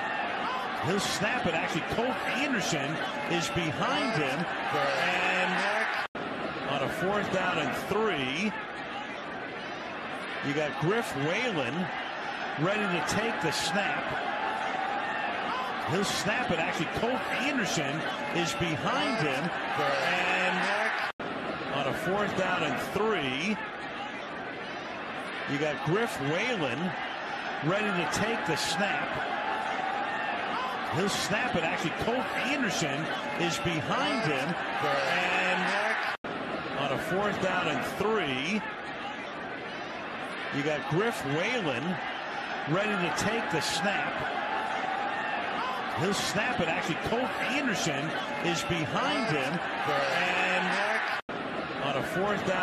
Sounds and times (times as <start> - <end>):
Speech: 0.7 - 6.0, 6.7 - 8.6, 10.4 - 12.0, 12.6 - 14.2, 15.8 - 21.1, 21.7 - 23.7, 25.5 - 27.0, 27.6 - 29.2, 30.8 - 36.2, 36.8 - 38.7, 40.5 - 42.0, 42.7 - 44.3, 45.6 - 51.2, 51.8 - 52.6.